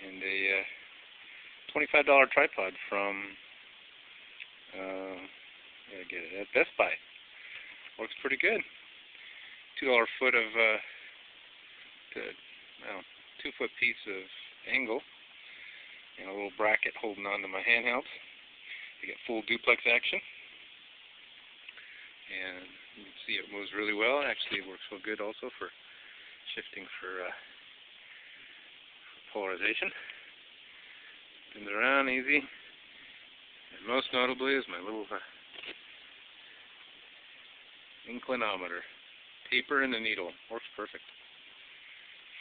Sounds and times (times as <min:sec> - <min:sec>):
Speech: 0:00.0 - 0:00.8, 0:01.7 - 0:03.4, 0:04.7 - 0:05.3, 0:05.9 - 0:07.0, 0:08.0 - 0:08.7, 0:09.8 - 0:10.9, 0:12.1 - 0:15.0, 0:16.2 - 0:18.2, 0:19.0 - 0:20.2, 0:22.3 - 0:25.8, 0:26.5 - 0:27.5, 0:29.3 - 0:30.1, 0:31.6 - 0:32.6, 0:33.8 - 0:35.4, 0:38.0 - 0:38.9, 0:39.5 - 0:41.1.